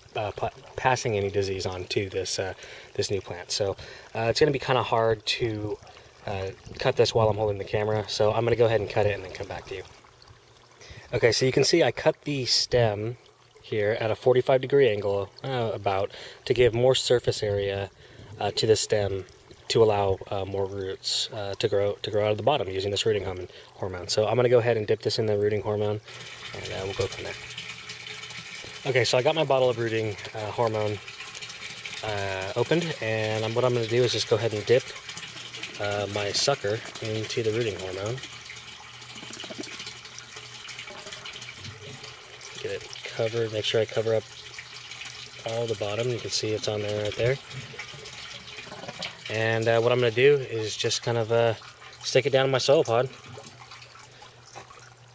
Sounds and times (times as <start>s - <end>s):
Pump (liquid): 0.0s - 55.1s
Speech: 0.1s - 9.9s, 11.1s - 27.4s, 28.8s - 31.0s, 32.0s - 35.0s, 35.8s - 38.2s, 42.6s - 44.2s, 45.4s - 47.4s, 49.3s - 53.2s.